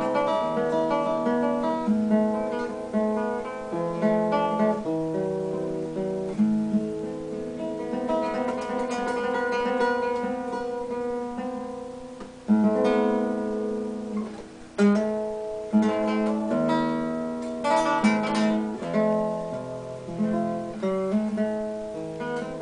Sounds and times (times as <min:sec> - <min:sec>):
Acoustic guitar: 0:00.0 - 0:22.6.